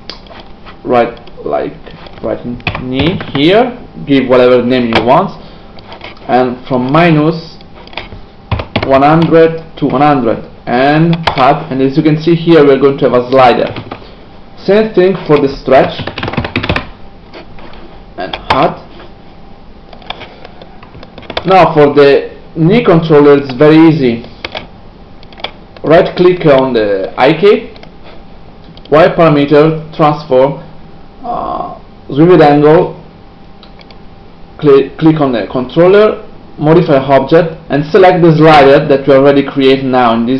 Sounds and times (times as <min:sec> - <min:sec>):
Inside, small room: 0:00.0 - 0:40.3
Speech: 0:00.8 - 0:05.4, 0:06.3 - 0:07.6, 0:08.8 - 0:13.8, 0:14.6 - 0:16.1, 0:18.2 - 0:18.9, 0:21.4 - 0:24.3, 0:25.8 - 0:27.8, 0:28.9 - 0:33.0, 0:34.6 - 0:40.3
Typewriter: 0:16.0 - 0:16.9.